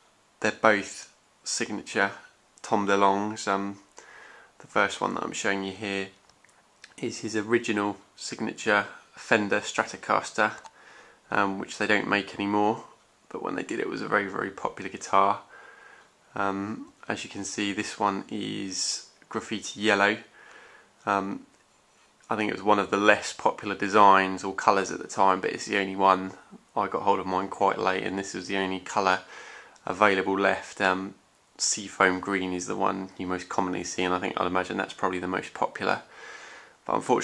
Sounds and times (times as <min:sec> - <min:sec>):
Speech: 0:00.4 - 0:03.9, 0:04.6 - 0:06.2, 0:06.8 - 0:10.7, 0:11.3 - 0:15.5, 0:16.3 - 0:20.4, 0:21.0 - 0:21.6, 0:22.3 - 0:36.1, 0:36.8 - 0:37.2.